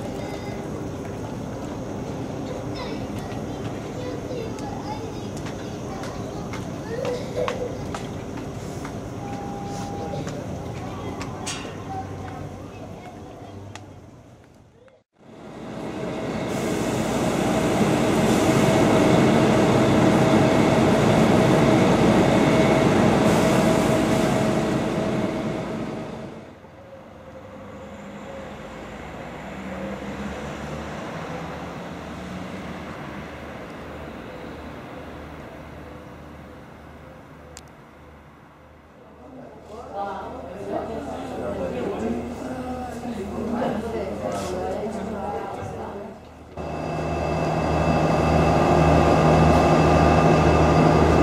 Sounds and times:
Railroad car, train wagon: 0.0s - 51.2s
Train: 0.0s - 51.2s.

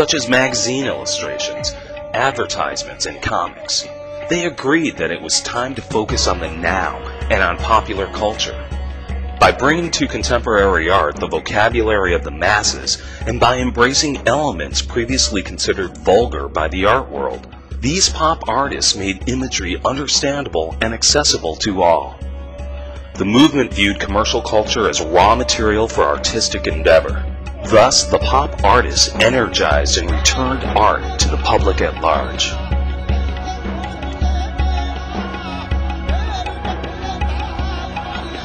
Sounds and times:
Speech: 0.0s - 8.6s, 9.4s - 22.2s, 23.2s - 32.6s
Music: 0.0s - 38.4s.

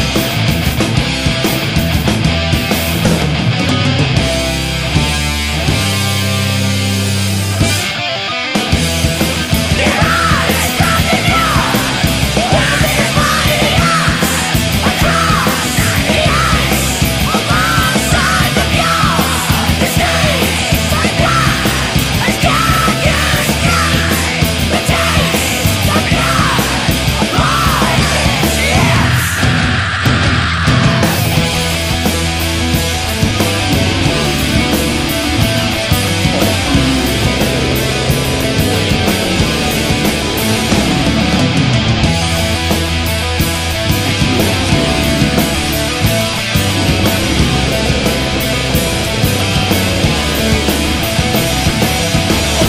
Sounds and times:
Heavy metal: 0.0s - 52.6s.

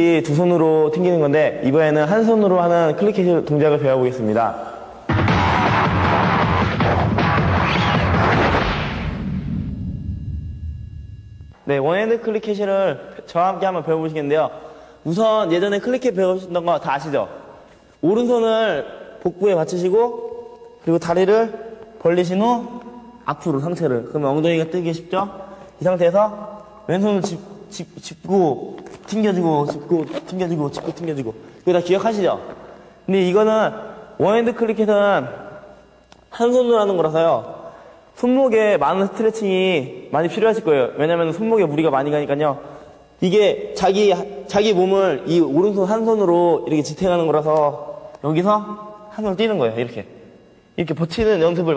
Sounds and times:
Speech: 0.0s - 4.8s, 11.6s - 17.4s, 18.0s - 35.6s, 36.3s - 37.6s, 38.2s - 50.1s, 50.8s - 51.7s.

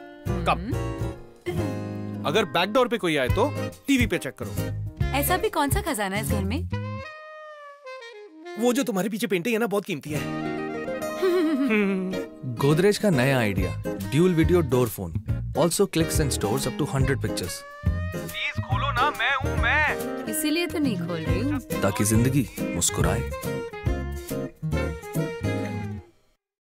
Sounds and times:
Music: 0.0s - 26.4s.

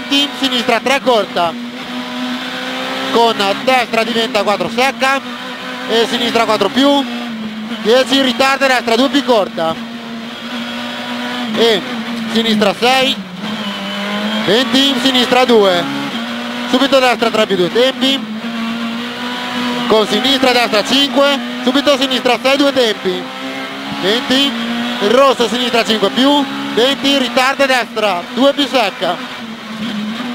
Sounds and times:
Speech: 0.0s - 1.6s, 3.1s - 5.2s, 5.9s - 7.1s, 7.8s - 9.8s, 11.5s - 13.2s, 14.5s - 15.9s, 16.7s - 18.2s, 19.9s - 23.3s, 24.0s - 29.2s
Car: 0.0s - 30.3s.

